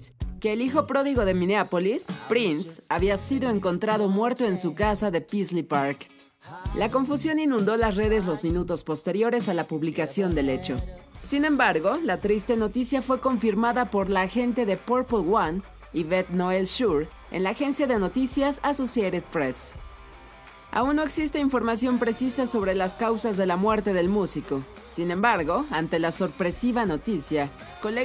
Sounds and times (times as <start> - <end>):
Speech: 0.0 - 19.7, 20.8 - 28.0
Music: 0.0 - 28.0.